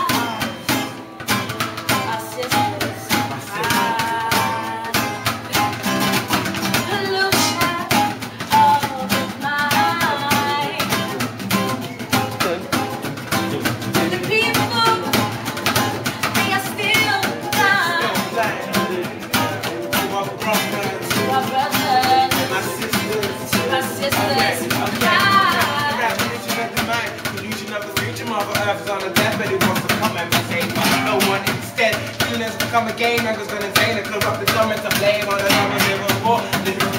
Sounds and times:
Music: 0.0 - 36.9.

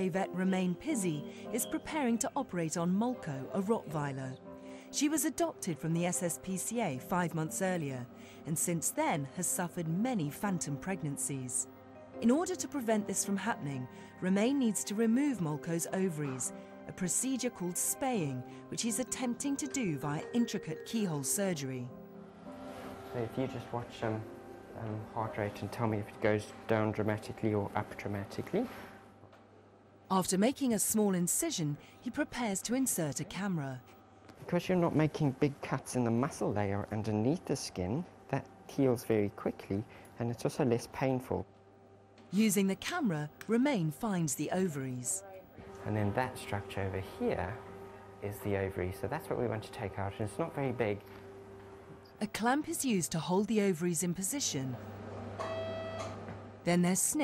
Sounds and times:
Music: 0.0 - 57.2
Speech: 30.1 - 33.8, 34.4 - 41.5, 42.4 - 47.6, 48.2 - 51.0, 52.2 - 54.8, 56.7 - 57.2.

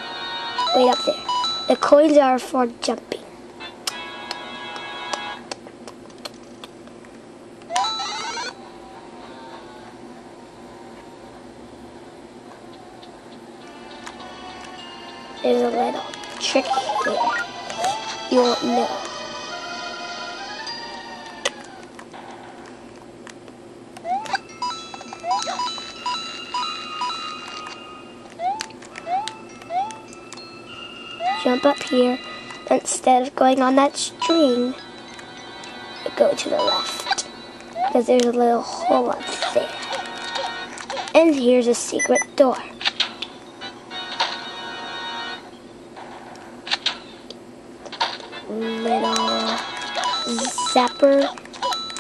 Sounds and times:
Music: 3.9 - 5.4, 13.6 - 21.6, 29.5 - 32.7, 34.8 - 36.2.

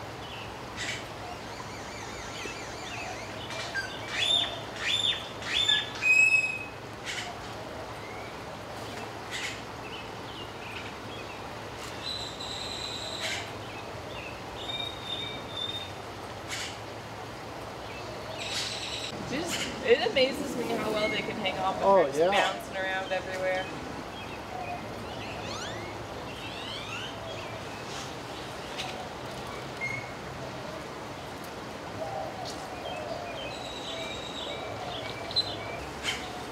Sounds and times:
Outside, rural or natural: 0.0 - 36.5.

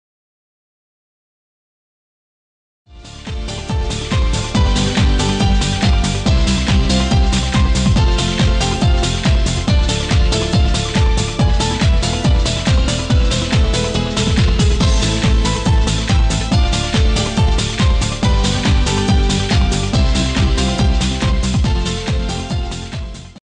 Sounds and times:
Music: 2.9 - 23.4.

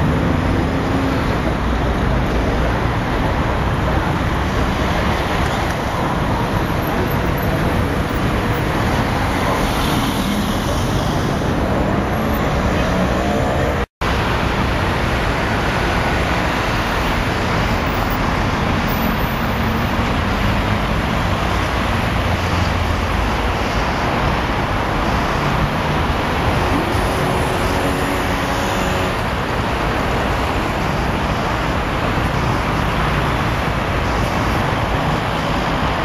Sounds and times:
Car: 0.0 - 36.0
Traffic noise, roadway noise: 0.0 - 36.0.

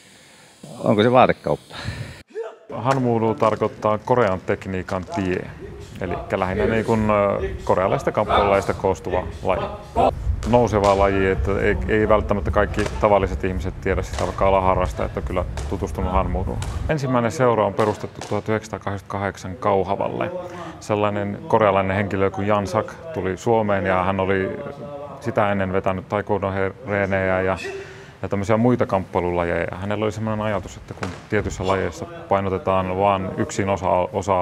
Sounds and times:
Speech: 0.7 - 1.6, 2.3 - 34.4.

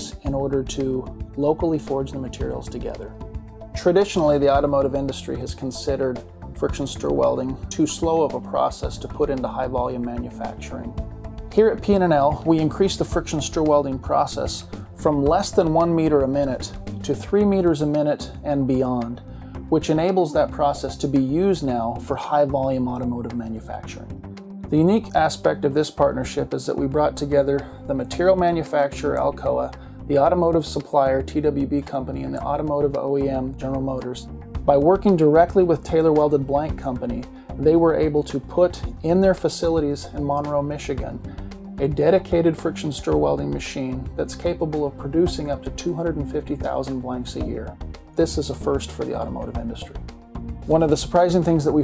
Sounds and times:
Speech: 0.0 - 3.2, 3.8 - 24.1, 24.7 - 50.0, 50.7 - 51.8
Music: 0.0 - 51.8.

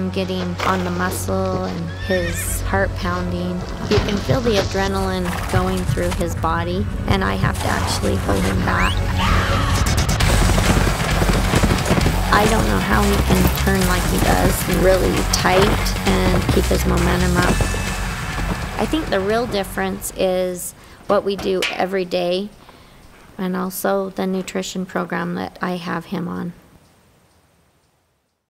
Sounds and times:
Speech: 0.0 - 9.0, 12.3 - 17.6, 18.8 - 22.6, 23.4 - 26.6.

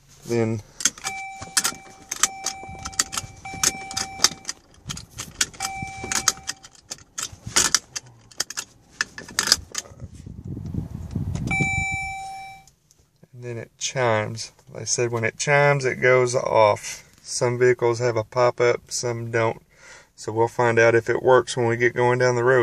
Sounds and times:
Outside, urban or manmade: 0.0 - 18.6
Speech: 0.2 - 0.6, 13.3 - 19.6, 20.2 - 22.6
Keys jangling: 0.8 - 10.0.

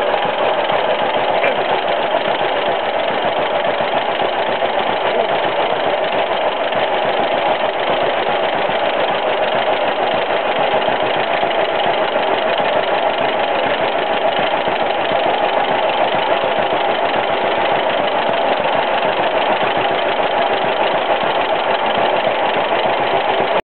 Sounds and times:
Idling: 0.0 - 23.6
Medium engine (mid frequency): 0.0 - 23.6.

